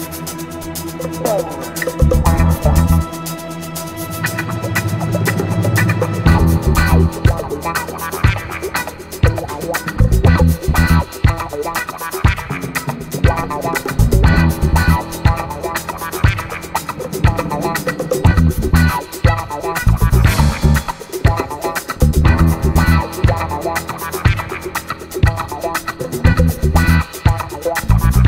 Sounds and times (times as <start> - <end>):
Music: 0.0 - 28.2.